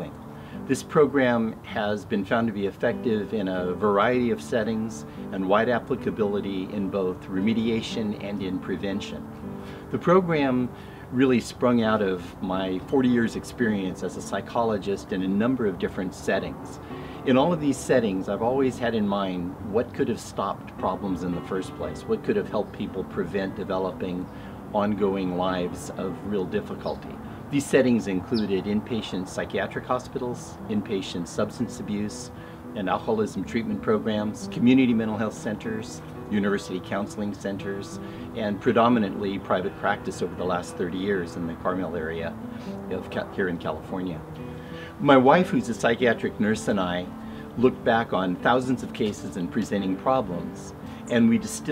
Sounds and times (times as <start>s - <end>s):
Speech: 0.0s - 9.2s, 9.9s - 44.3s, 45.0s - 51.7s
Music: 0.0s - 51.7s.